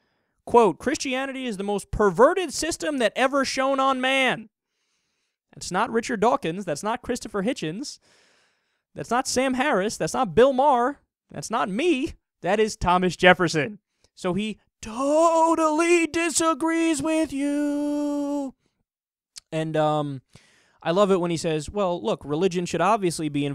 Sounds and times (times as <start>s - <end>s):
Narration, monologue: 0.0s - 23.5s.